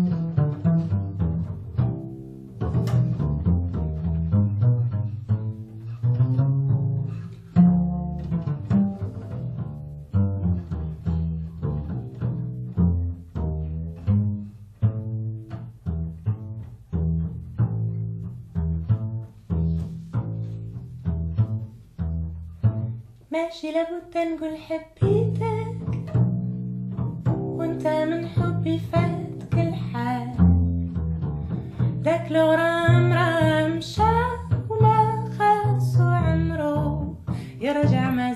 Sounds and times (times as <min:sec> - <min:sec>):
Music: 0:00.0 - 0:23.3, 0:23.9 - 0:38.3.